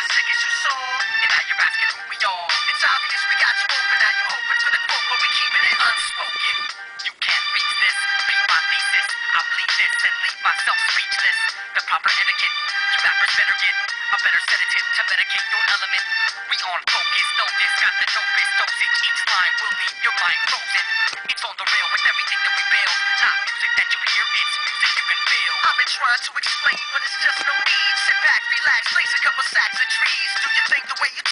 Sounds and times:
Music: 0.0s - 31.3s.

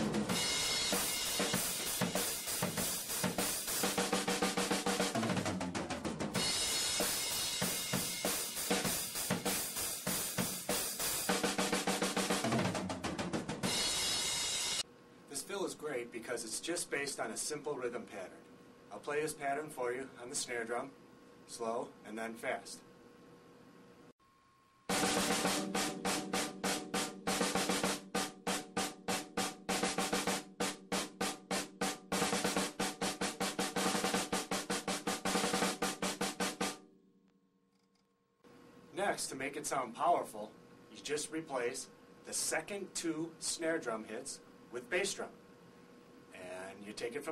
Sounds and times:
Music: 0.0s - 14.8s, 24.9s - 36.9s
Speech: 15.3s - 22.9s, 38.9s - 45.4s, 46.4s - 47.3s.

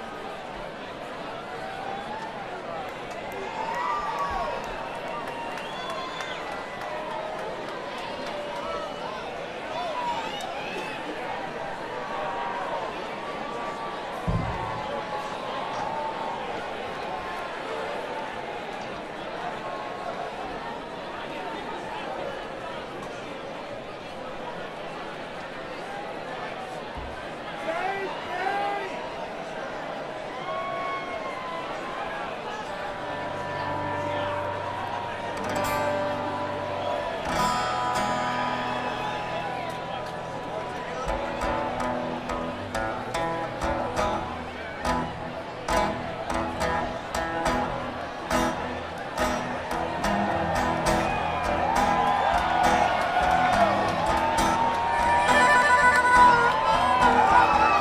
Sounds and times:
Speech: 6.3s - 36.0s.

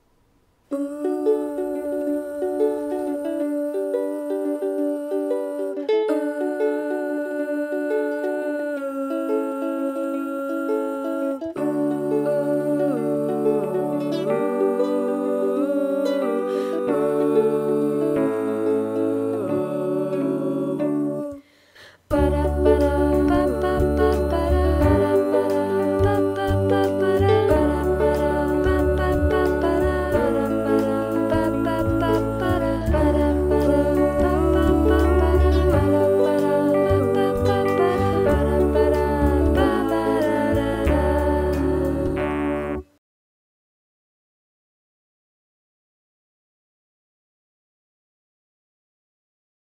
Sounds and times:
Music: 0.8s - 43.0s.

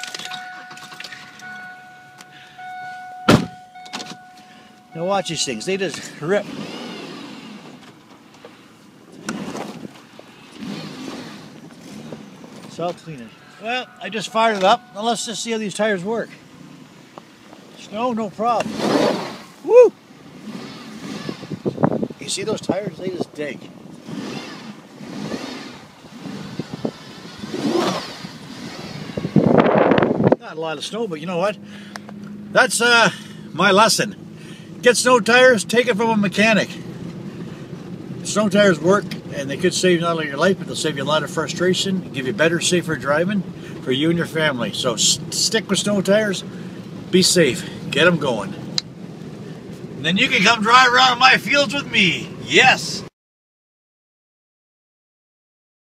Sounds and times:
Speech: 5.0s - 6.4s, 12.7s - 16.4s, 17.8s - 18.7s, 22.2s - 23.7s, 30.4s - 31.6s, 32.6s - 34.2s, 34.8s - 36.8s, 38.2s - 46.5s, 47.2s - 48.6s, 50.0s - 53.1s
Tire squeal: 10.3s - 16.0s, 24.0s - 29.7s.

